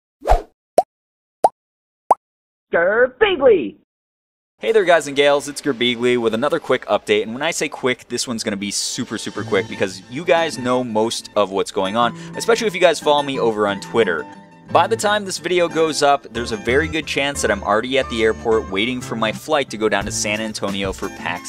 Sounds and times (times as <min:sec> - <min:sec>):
Speech: 0:02.7 - 0:03.8, 0:04.6 - 0:21.4
Music: 0:08.2 - 0:21.4.